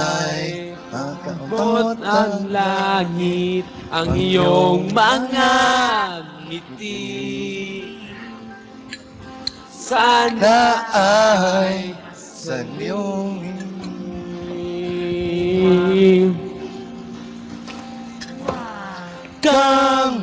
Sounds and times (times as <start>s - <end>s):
Male singing: 0.0s - 8.7s, 9.8s - 16.6s, 18.5s - 20.2s.